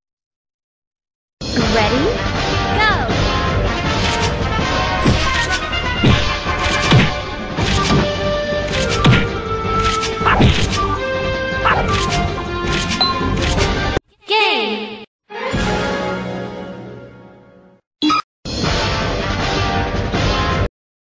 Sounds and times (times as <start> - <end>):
Music: 1.4 - 14.0, 15.3 - 17.8, 18.5 - 20.7
Speech: 1.6 - 2.2, 2.8 - 3.1, 14.2 - 15.1.